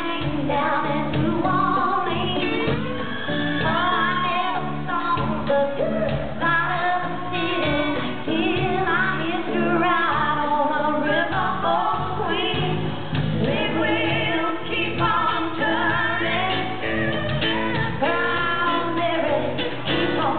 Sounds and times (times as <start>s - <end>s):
Female singing: 0.0s - 20.3s
Music: 0.0s - 20.3s.